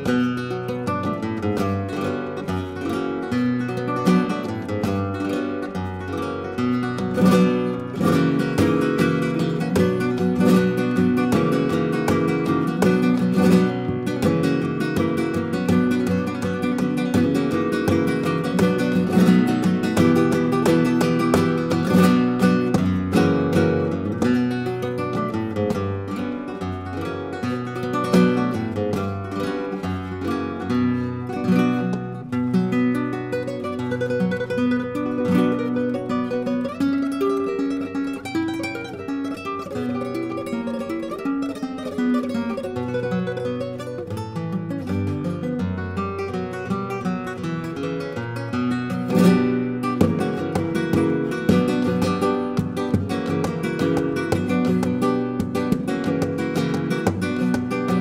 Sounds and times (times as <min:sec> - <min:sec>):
Flamenco: 0:00.0 - 0:58.0
Strum: 0:00.0 - 0:58.0.